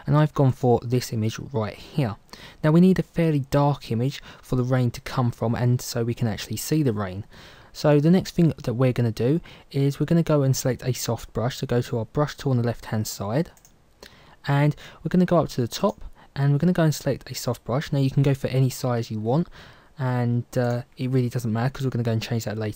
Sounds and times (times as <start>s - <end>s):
Speech: 0.0s - 13.6s, 14.4s - 22.7s.